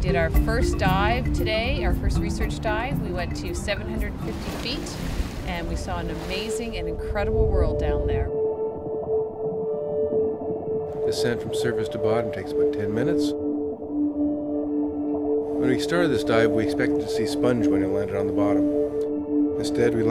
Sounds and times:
Music: 0:00.0 - 0:20.1
Speech: 0:05.5 - 0:08.3, 0:11.1 - 0:13.3.

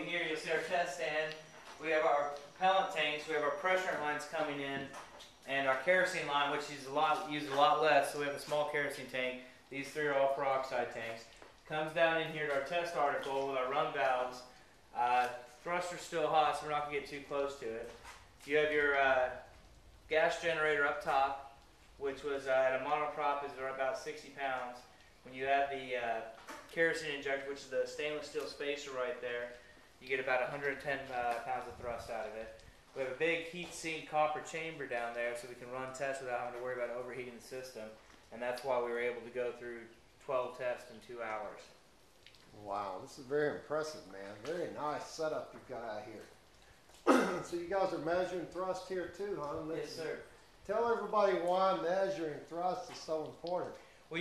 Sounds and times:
Speech: 0:00.0 - 0:19.5, 0:20.1 - 0:41.8, 0:42.5 - 0:46.4, 0:47.1 - 0:54.2.

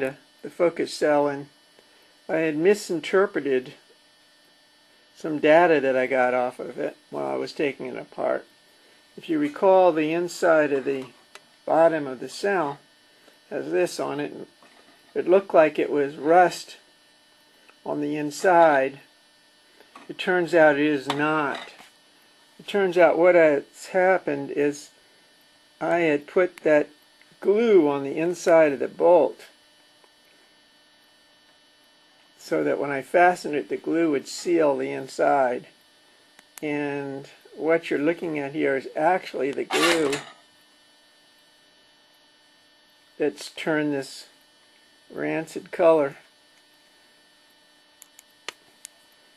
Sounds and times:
Speech: 0:00.0 - 0:01.6, 0:02.3 - 0:03.9, 0:05.2 - 0:08.5, 0:09.2 - 0:12.8, 0:13.5 - 0:14.6, 0:15.2 - 0:16.9, 0:17.8 - 0:19.1, 0:20.0 - 0:21.8, 0:22.6 - 0:25.0, 0:25.8 - 0:29.6, 0:32.4 - 0:35.8, 0:36.6 - 0:40.3, 0:43.2 - 0:44.4, 0:45.1 - 0:46.3.

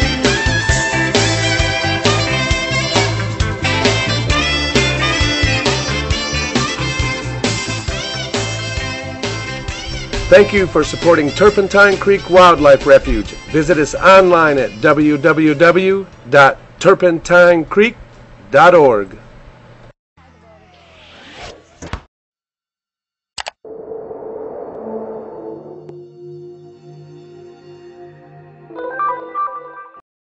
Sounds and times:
Music: 0:00.0 - 0:15.7, 0:25.8 - 0:30.0.

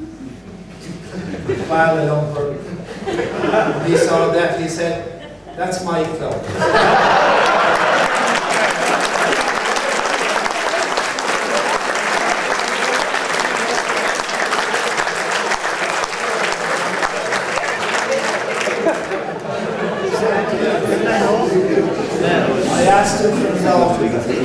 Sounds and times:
Male speech, man speaking: 0:01.5 - 0:02.8, 0:03.6 - 0:06.5, 0:20.2 - 0:24.4.

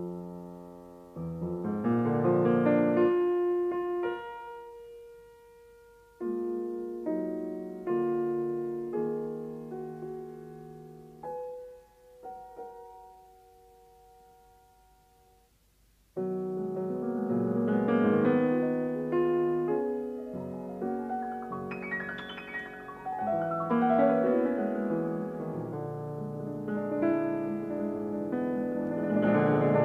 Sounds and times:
Music: 0:00.0 - 0:29.8.

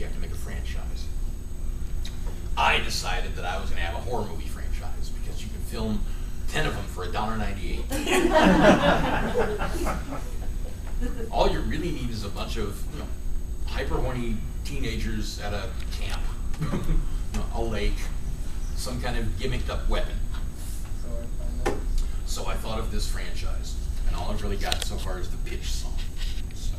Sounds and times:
Speech: 0:00.0 - 0:01.1, 0:02.6 - 0:07.9, 0:13.7 - 0:16.3, 0:21.0 - 0:26.7.

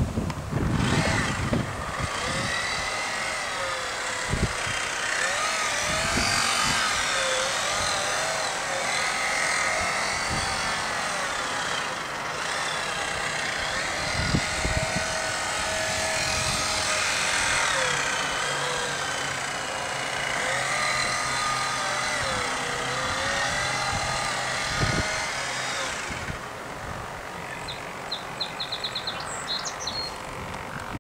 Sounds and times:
Motorboat, speedboat: 0:00.0 - 0:31.0.

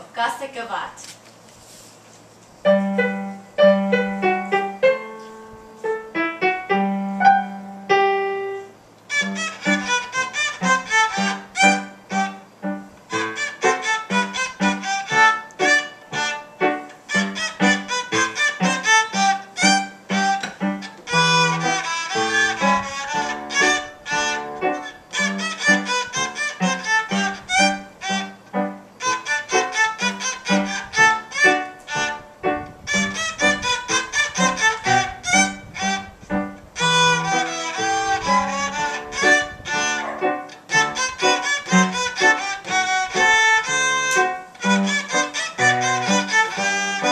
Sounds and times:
Violin, fiddle: 0:09.1 - 0:12.5, 0:13.1 - 0:47.1.

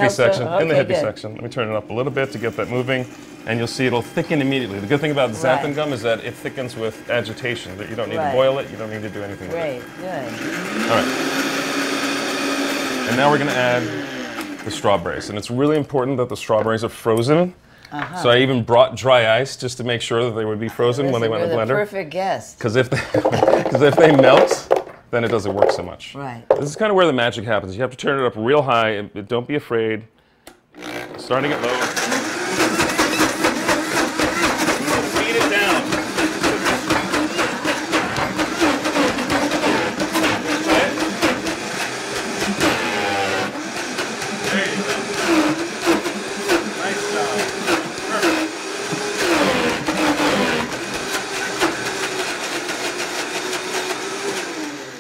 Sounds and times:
Blender: 0:00.0 - 0:01.1, 0:01.9 - 0:15.2, 0:23.2 - 0:24.8, 0:30.8 - 0:55.0.

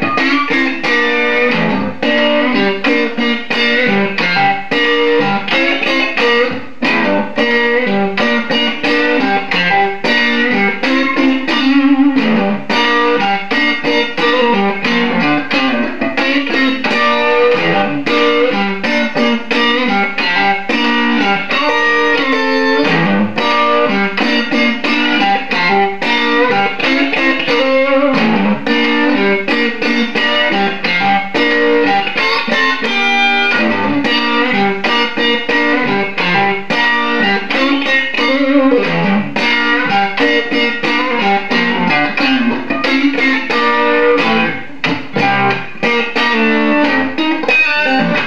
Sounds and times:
Guitar: 0:00.0 - 0:48.2.

